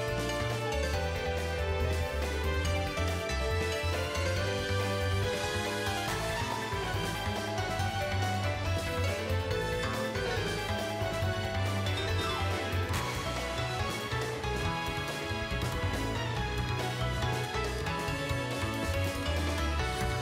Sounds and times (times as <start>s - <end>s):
Soundtrack music: 0.0s - 20.2s.